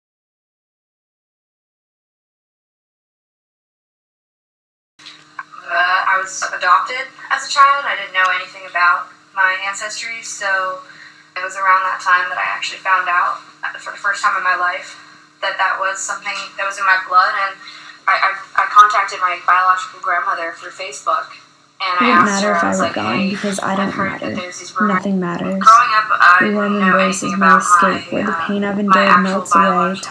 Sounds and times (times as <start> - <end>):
Speech: 5.4 - 30.1.